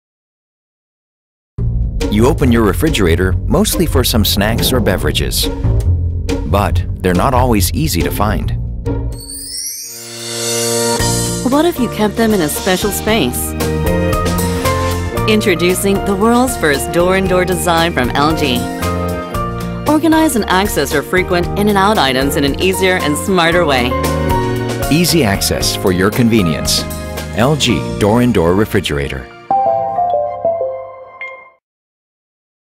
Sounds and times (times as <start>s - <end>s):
Music: 1.6s - 31.6s
Speech: 2.1s - 5.5s, 6.5s - 8.6s, 11.5s - 13.5s, 15.3s - 18.7s, 19.9s - 23.9s, 24.9s - 26.8s, 27.4s - 29.3s.